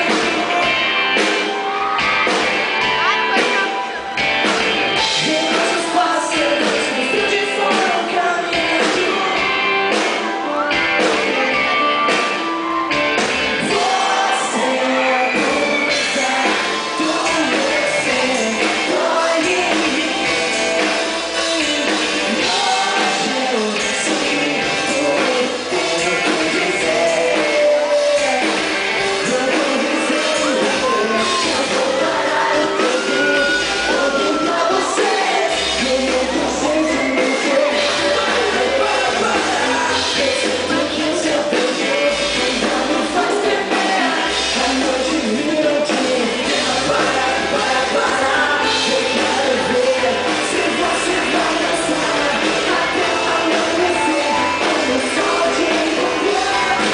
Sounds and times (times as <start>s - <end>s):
Dance music: 0.0s - 56.9s.